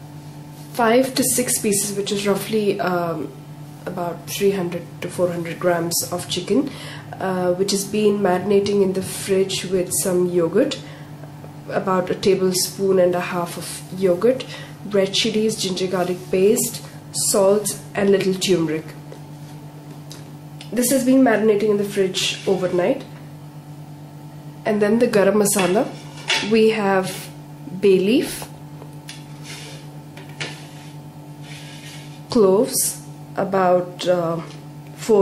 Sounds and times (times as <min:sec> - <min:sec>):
Speech: 0:00.7 - 0:10.8, 0:11.7 - 0:19.0, 0:20.6 - 0:23.1, 0:24.7 - 0:28.5, 0:32.3 - 0:35.2.